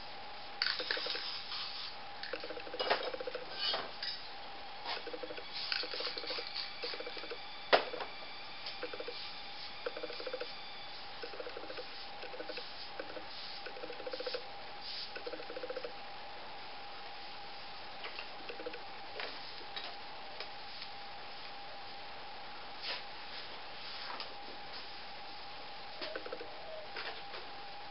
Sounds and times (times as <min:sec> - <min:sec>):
Spray: 0:00.6 - 0:02.0, 0:11.8 - 0:15.2.